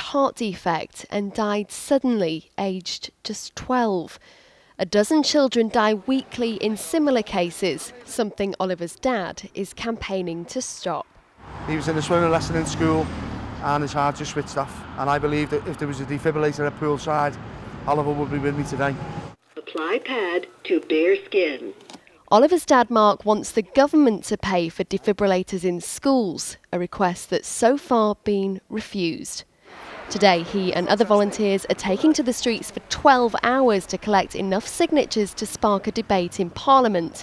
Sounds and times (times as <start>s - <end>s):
Speech: 4.8s - 11.0s, 11.7s - 19.0s, 19.6s - 29.4s, 30.1s - 37.2s.